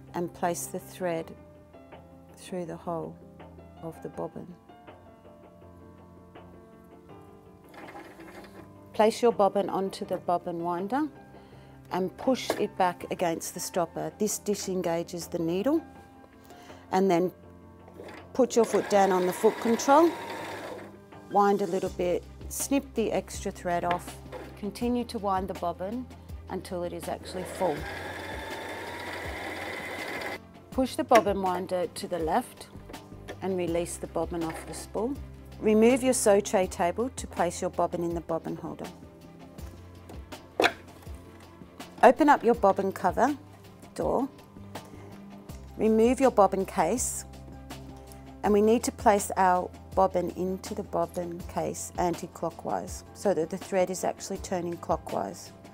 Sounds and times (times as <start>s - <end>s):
Music: 0.0s - 55.7s.